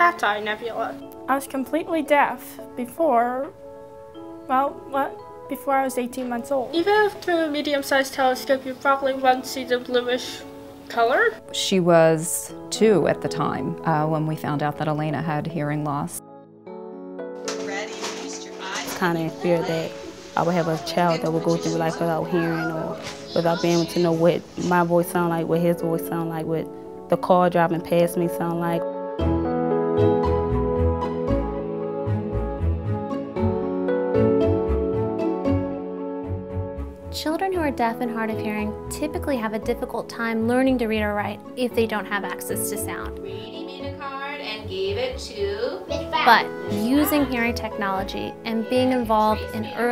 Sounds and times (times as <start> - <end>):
Female speech, woman speaking: 0.0 - 3.5, 4.5 - 7.1, 8.4 - 16.2, 17.5 - 28.8, 37.2 - 49.9
Music: 0.0 - 49.9.